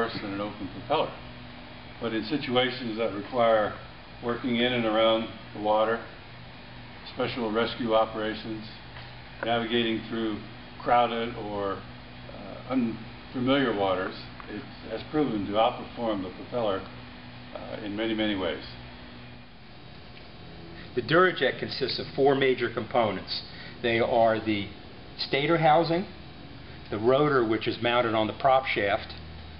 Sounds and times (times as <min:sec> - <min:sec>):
Speech: 0:00.0 - 0:01.2, 0:02.0 - 0:06.1, 0:07.0 - 0:08.8, 0:09.4 - 0:16.9, 0:17.5 - 0:18.8, 0:21.0 - 0:26.2, 0:26.9 - 0:29.2.